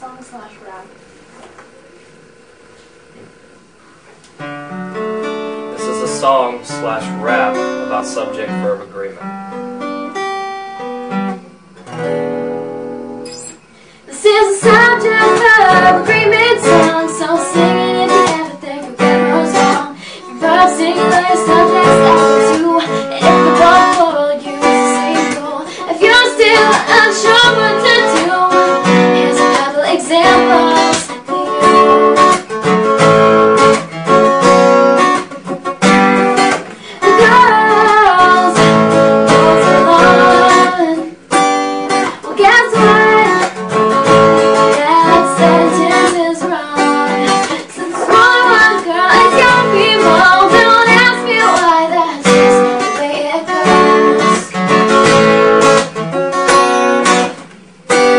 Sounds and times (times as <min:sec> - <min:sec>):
Strum: 0:02.8 - 0:58.1.